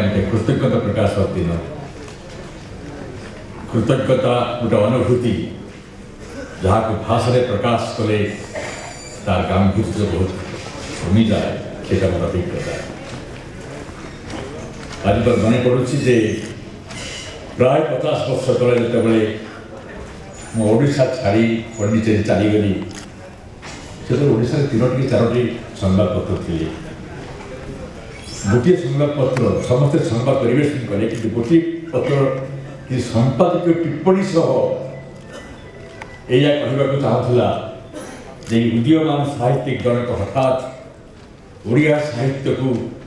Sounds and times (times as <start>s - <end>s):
Male speech, man speaking: 0.0s - 1.9s, 3.7s - 5.6s, 6.6s - 12.9s, 15.0s - 16.6s, 17.6s - 19.6s, 20.5s - 23.0s, 24.1s - 26.9s, 28.4s - 35.0s, 36.3s - 37.8s, 38.4s - 40.9s, 41.6s - 43.0s
Narration, monologue: 0.0s - 2.3s, 3.5s - 13.2s, 14.6s - 43.0s.